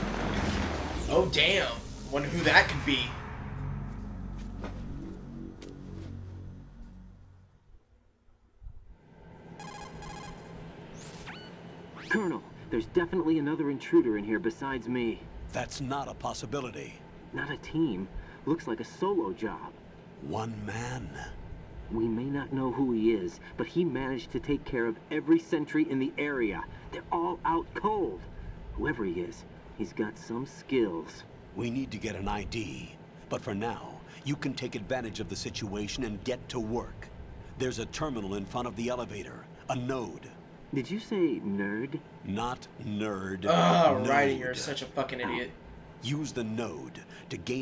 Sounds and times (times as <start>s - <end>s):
Music: 1.3s - 7.6s.